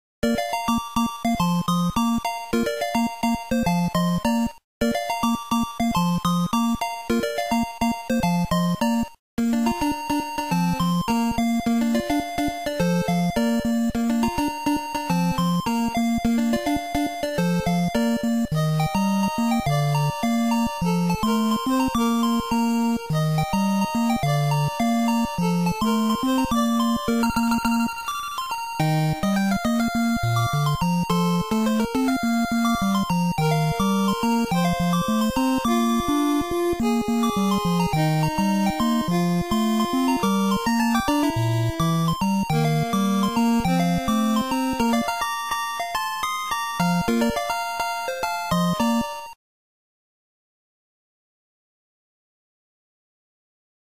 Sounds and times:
Music: 0.2s - 49.4s.

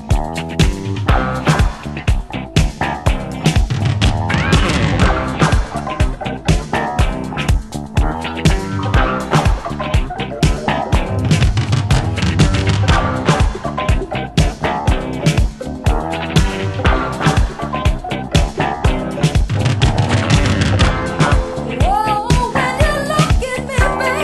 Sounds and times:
Disco: 0.0s - 24.2s.

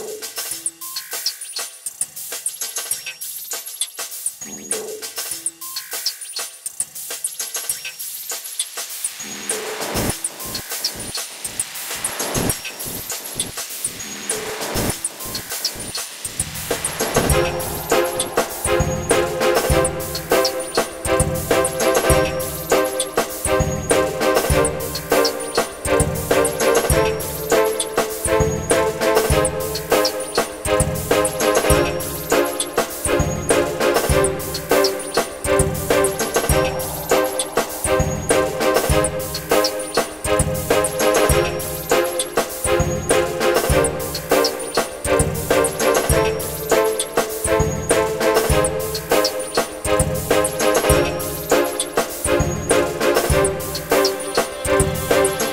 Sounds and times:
Music: 0.0s - 55.5s.

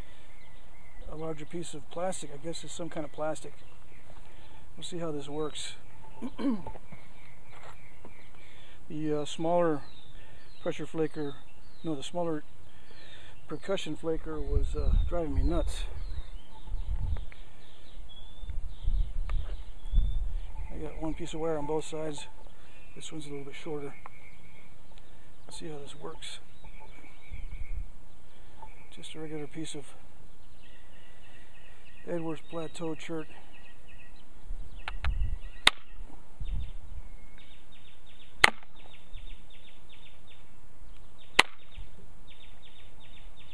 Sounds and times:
Speech: 1.1s - 3.6s, 10.6s - 12.4s, 13.5s - 15.9s, 23.0s - 24.0s, 25.5s - 26.4s, 28.9s - 30.0s, 32.1s - 33.4s.

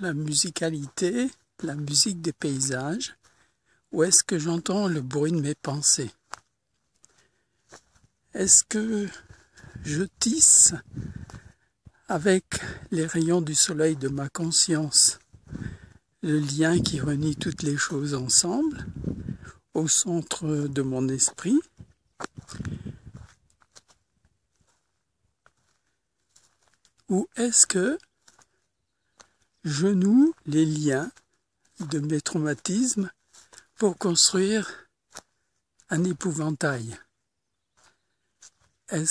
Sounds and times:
Speech: 0.0s - 3.2s, 3.9s - 6.2s, 8.3s - 11.0s, 12.0s - 15.2s, 16.2s - 19.0s, 19.7s - 21.7s, 27.1s - 28.1s, 29.6s - 31.2s, 31.8s - 33.2s, 33.8s - 34.9s, 35.9s - 37.1s, 38.9s - 39.1s.

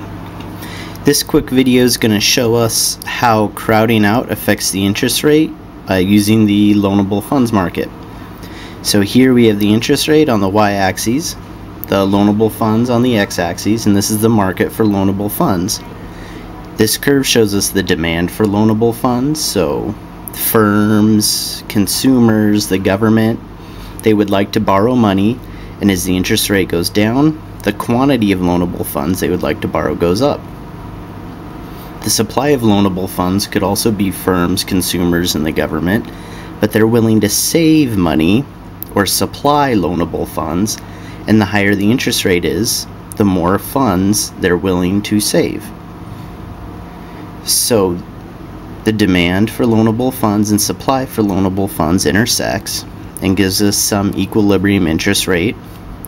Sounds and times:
Speech: 1.0s - 8.0s, 8.8s - 15.9s, 16.7s - 30.5s, 32.0s - 45.8s, 47.4s - 48.2s, 48.8s - 56.0s.

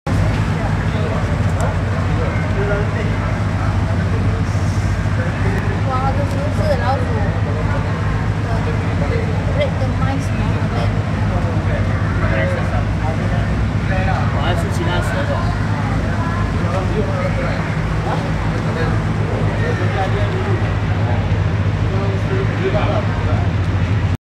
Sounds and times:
Speech: 0.1s - 23.7s.

